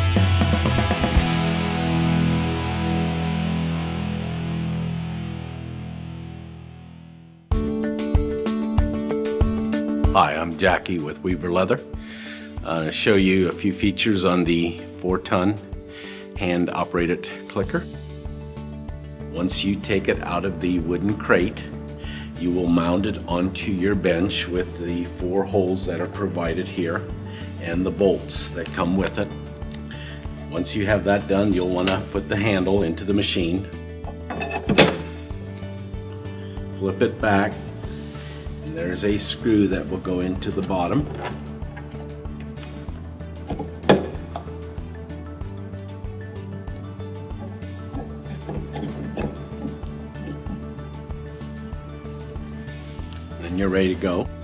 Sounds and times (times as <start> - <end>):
Music: 0.0 - 54.4
Speech: 10.2 - 11.9, 12.6 - 15.6, 16.4 - 17.9, 19.3 - 21.8, 22.4 - 29.4, 30.5 - 33.7, 36.8 - 37.7, 38.6 - 41.2, 53.4 - 54.3.